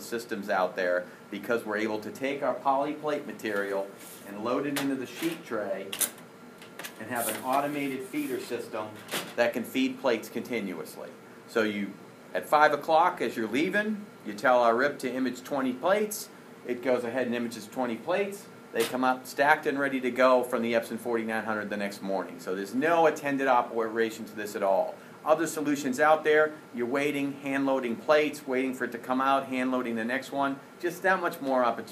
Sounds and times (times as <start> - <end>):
Speech: 0.0 - 6.0, 7.0 - 31.9.